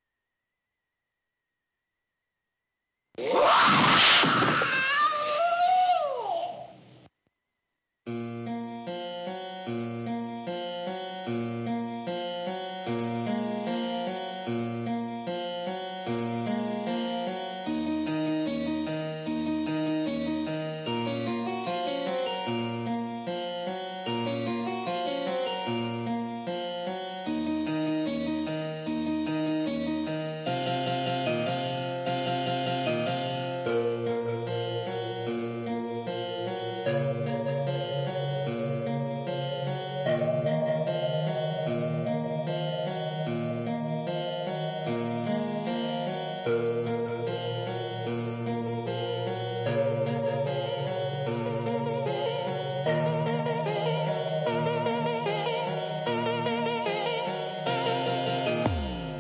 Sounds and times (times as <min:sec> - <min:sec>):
Harpsichord: 0:08.5 - 0:59.2.